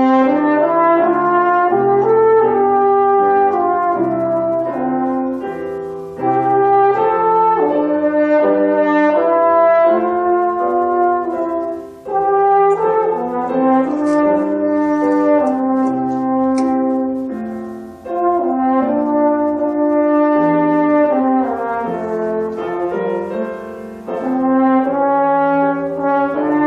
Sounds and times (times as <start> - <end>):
French horn: 0.0 - 26.6.